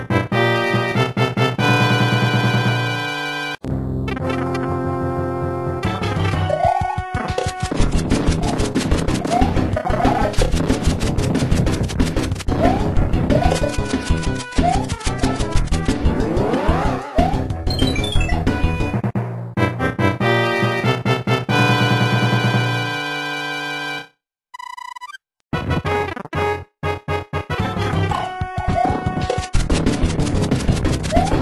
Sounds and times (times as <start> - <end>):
Music: 0.0 - 24.2, 25.5 - 31.4.